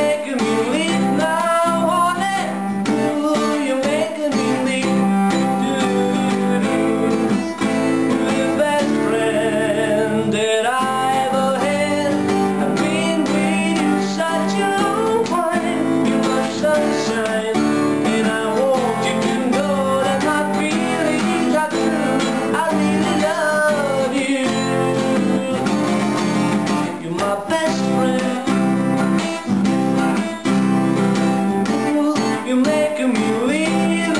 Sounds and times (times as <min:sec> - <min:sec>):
Acoustic guitar: 0:00.0 - 0:34.1
Electric guitar: 0:00.0 - 0:34.1.